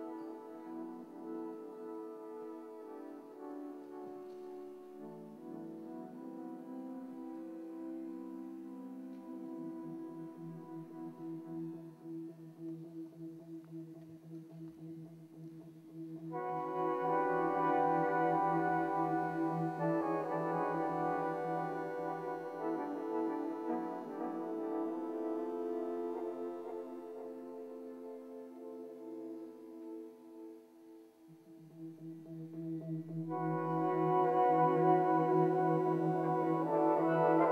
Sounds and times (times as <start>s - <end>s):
Inside, large room or hall: 0.0s - 37.5s
Music: 0.0s - 37.5s.